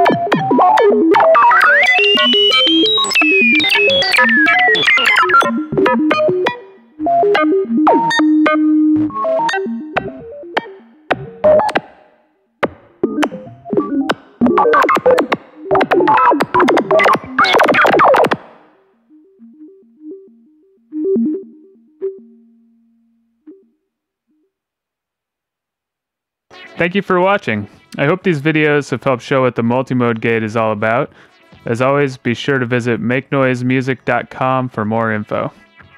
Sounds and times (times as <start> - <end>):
Synthesizer: 0.0 - 23.8, 26.5 - 35.9.